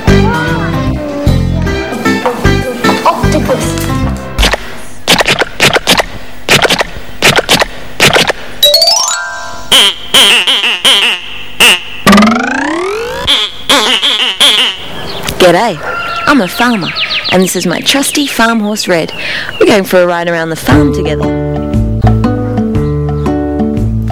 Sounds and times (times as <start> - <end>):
Music for children: 0.0 - 4.4, 8.6 - 13.5, 20.8 - 24.1.